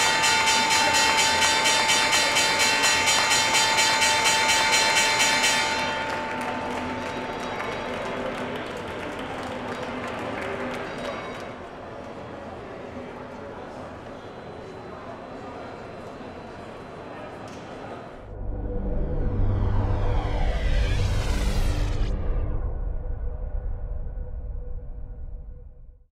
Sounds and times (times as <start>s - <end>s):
Speech: 6.8s - 18.2s
Music: 18.2s - 26.1s.